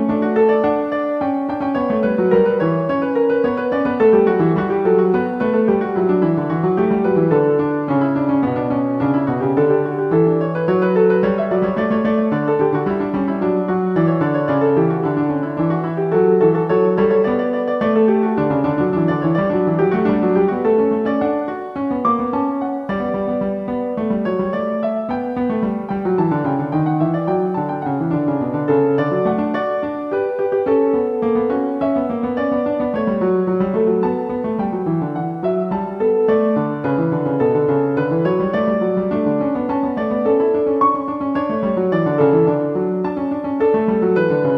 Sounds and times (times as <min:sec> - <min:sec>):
Electric piano: 0:00.0 - 0:44.5
Harpsichord: 0:00.0 - 0:44.5.